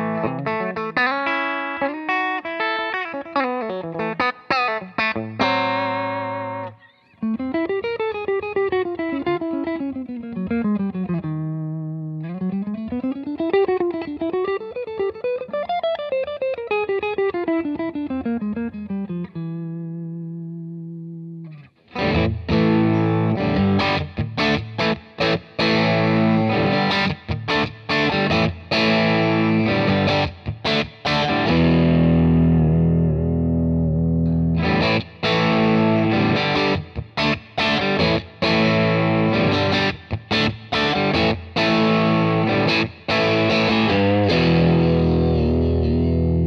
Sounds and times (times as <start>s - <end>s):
Distortion: 0.0s - 46.4s
Effects unit: 0.0s - 46.4s
Electric guitar: 0.0s - 46.4s.